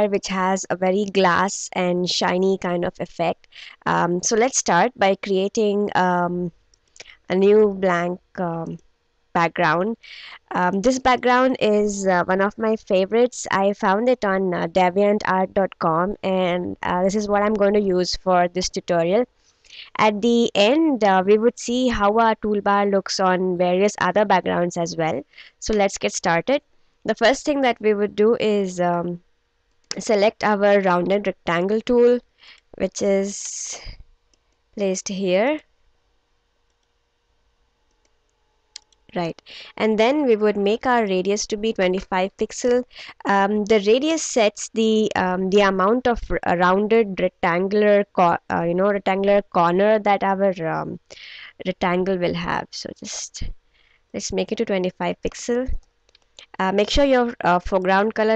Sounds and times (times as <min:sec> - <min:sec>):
Speech: 0:00.0 - 0:08.8, 0:09.4 - 0:29.2, 0:29.9 - 0:34.0, 0:34.8 - 0:35.6, 0:39.1 - 0:53.6, 0:54.2 - 0:55.8, 0:56.4 - 0:58.3.